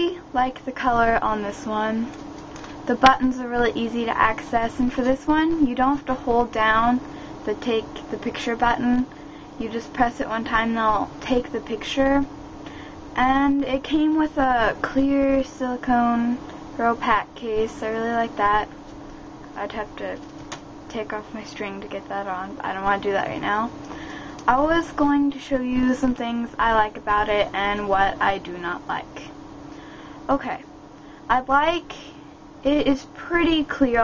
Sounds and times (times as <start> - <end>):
Speech: 0.0 - 2.1, 2.9 - 12.3, 13.2 - 18.7, 19.6 - 20.2, 20.9 - 23.7, 24.4 - 29.3, 30.3 - 30.7, 31.3 - 34.0.